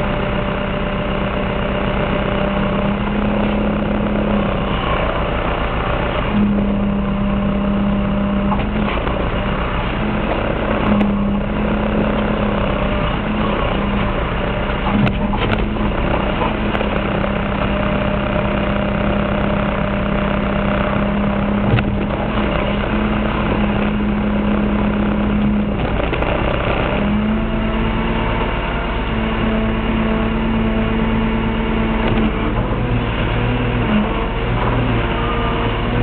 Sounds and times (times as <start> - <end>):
Vehicle: 0.0 - 36.0.